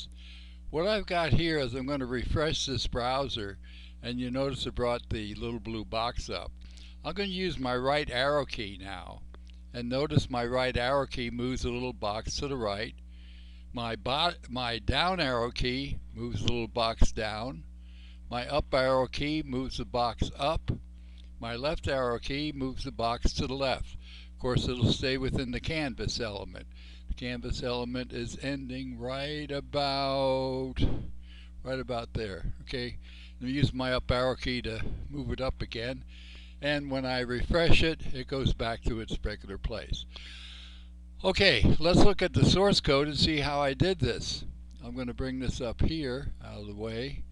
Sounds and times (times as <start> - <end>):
Speech: 0.7 - 13.0, 13.8 - 17.7, 18.3 - 20.8, 21.4 - 31.0, 31.6 - 40.1, 41.2 - 47.3.